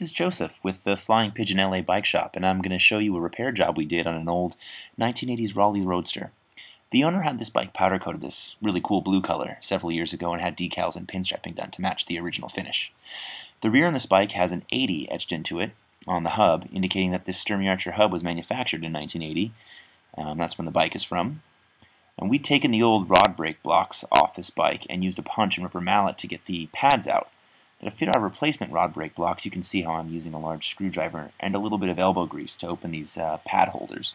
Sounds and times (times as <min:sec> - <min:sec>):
Speech: 0:00.0 - 0:13.0, 0:13.6 - 0:19.6, 0:20.2 - 0:21.4, 0:22.2 - 0:34.1.